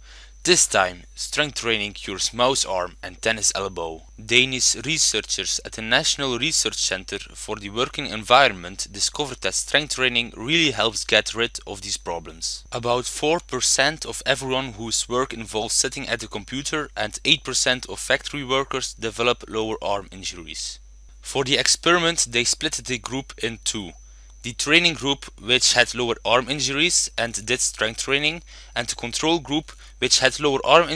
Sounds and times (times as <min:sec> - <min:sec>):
Speech: 0:00.4 - 0:30.9.